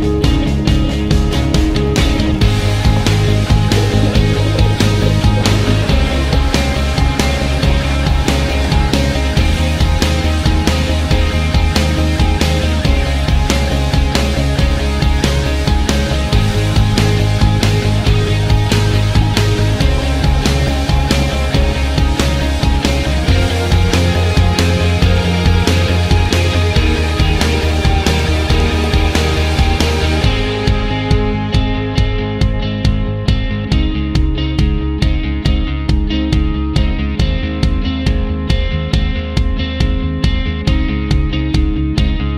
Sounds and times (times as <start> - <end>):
Music: 0.0 - 42.3.